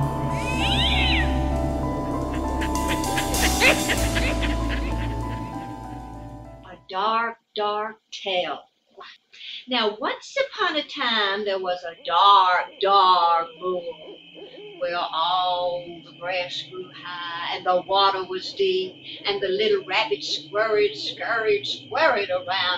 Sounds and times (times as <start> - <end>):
Speech: 6.7 - 8.6, 9.5 - 14.0, 14.8 - 22.7.